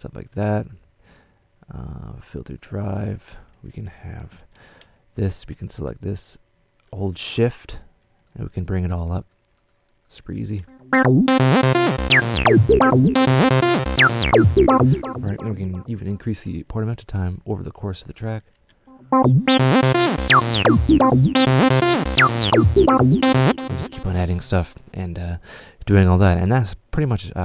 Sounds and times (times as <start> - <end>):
Speech: 0.0 - 0.8, 1.7 - 4.4, 5.2 - 6.4, 7.0 - 7.7, 8.4 - 9.3, 15.3 - 18.4, 24.0 - 27.4
Music: 10.7 - 15.9, 18.9 - 24.8.